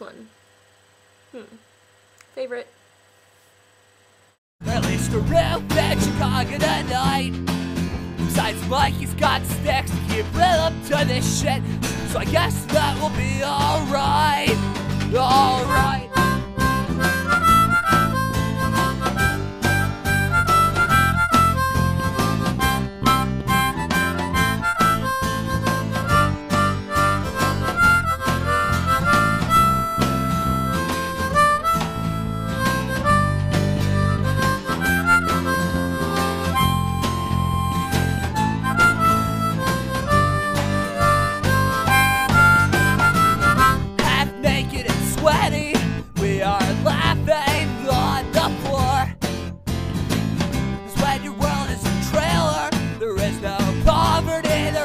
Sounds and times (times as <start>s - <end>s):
Harmonica: 4.6s - 49.1s, 50.9s - 54.8s
Wind instrument, woodwind instrument: 15.7s - 43.9s.